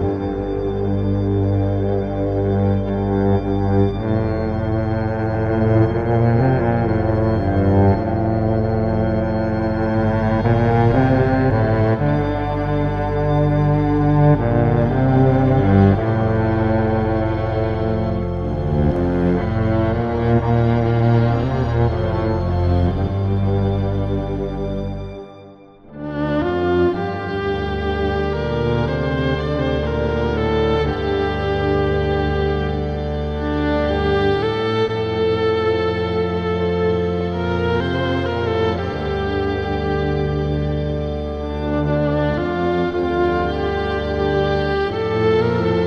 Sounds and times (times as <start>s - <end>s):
Violin, fiddle: 0.0s - 45.8s.